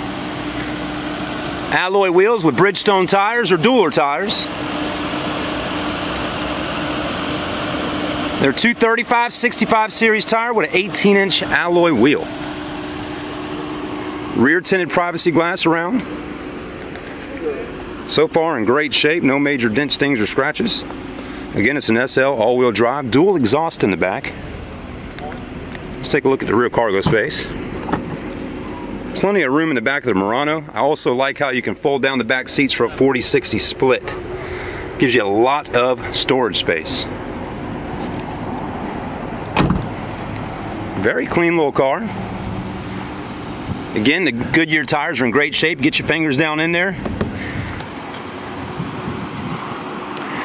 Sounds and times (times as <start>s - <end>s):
Speech: 1.7s - 4.5s, 8.4s - 12.3s, 14.4s - 16.1s, 17.2s - 20.9s, 21.6s - 24.4s, 26.0s - 27.6s, 29.1s - 34.2s, 35.0s - 37.1s, 41.0s - 42.2s, 43.9s - 47.0s.